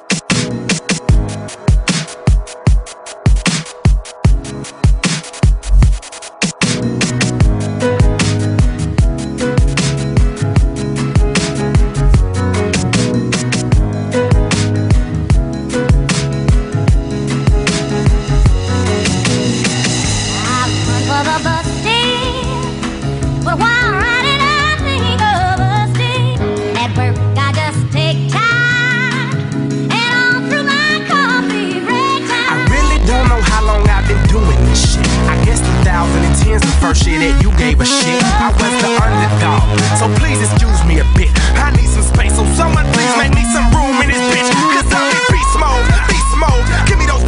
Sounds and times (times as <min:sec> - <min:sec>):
Jingle (music): 0:00.1 - 0:28.2, 0:29.0 - 0:47.2.